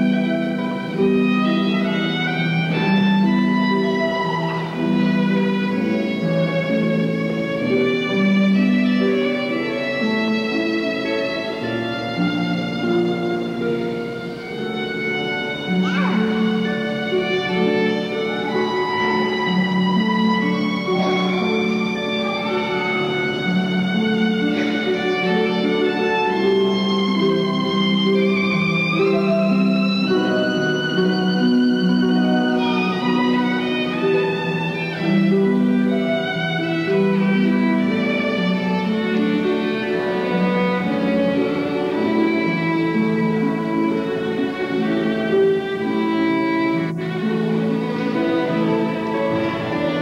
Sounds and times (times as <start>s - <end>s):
Pizzicato: 0.0s - 50.0s.